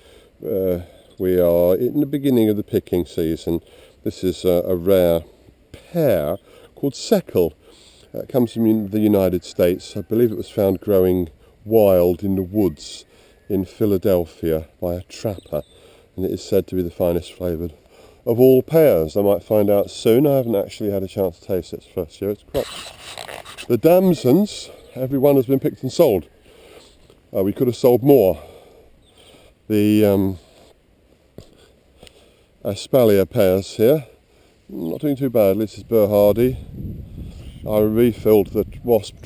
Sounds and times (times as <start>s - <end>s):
Speech: 0.4s - 15.6s, 16.2s - 22.8s, 23.7s - 26.3s, 27.3s - 28.4s, 29.7s - 30.4s, 32.6s - 34.1s, 34.7s - 36.7s, 37.6s - 39.2s.